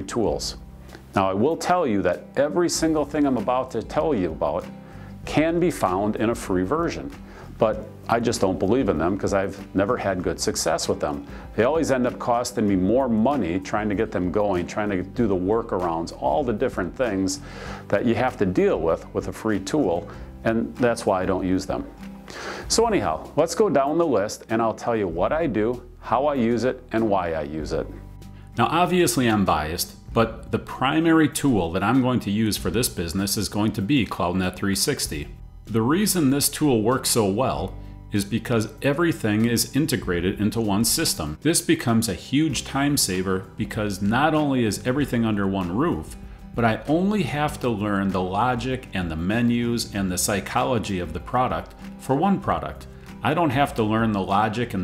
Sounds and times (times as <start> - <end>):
Speech: 0.0 - 0.6, 1.2 - 4.7, 5.3 - 21.9, 22.7 - 28.0, 28.6 - 54.8
Music: 0.0 - 54.8.